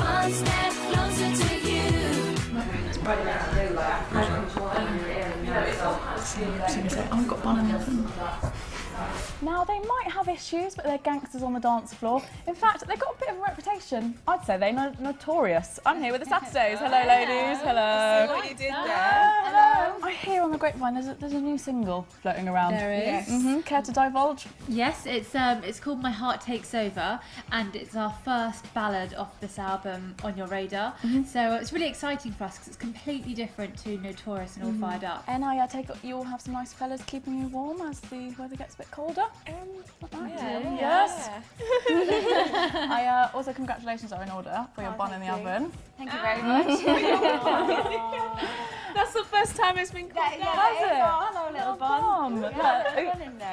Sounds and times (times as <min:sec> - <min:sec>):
Music: 0:00.0 - 0:53.5.